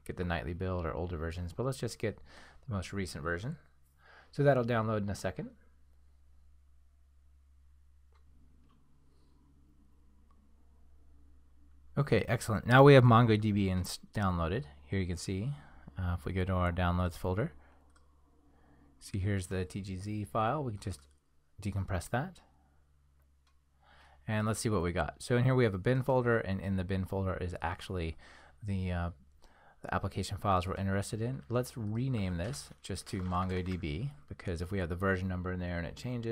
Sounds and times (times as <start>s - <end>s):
Speech: 0.0s - 3.7s, 4.3s - 5.6s, 12.0s - 17.6s, 19.0s - 22.5s, 24.2s - 29.2s, 29.8s - 36.3s
Inside, small room: 0.0s - 36.3s.